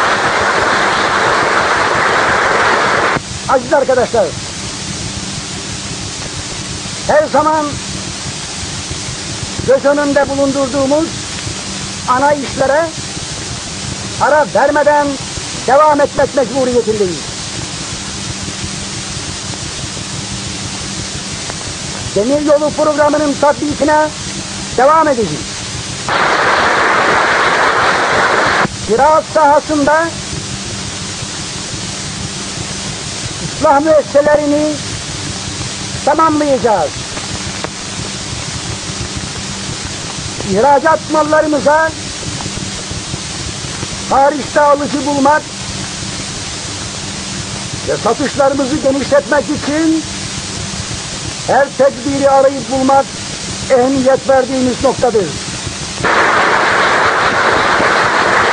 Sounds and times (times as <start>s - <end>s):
Speech: 3.5s - 4.4s, 7.1s - 7.8s, 9.6s - 11.2s, 12.1s - 13.0s, 14.2s - 17.3s, 22.1s - 24.2s, 24.8s - 25.5s, 28.9s - 30.2s, 33.6s - 34.8s, 36.0s - 37.0s, 40.4s - 42.0s, 44.1s - 45.5s, 47.9s - 50.1s, 51.5s - 53.1s, 53.7s - 55.4s.